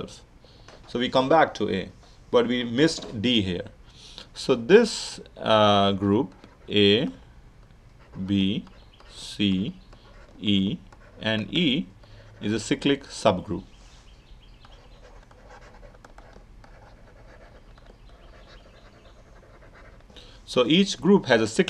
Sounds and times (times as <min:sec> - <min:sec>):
Speech: 0:00.9 - 0:03.7, 0:04.4 - 0:07.2, 0:08.2 - 0:09.8, 0:10.4 - 0:13.7, 0:20.5 - 0:21.6.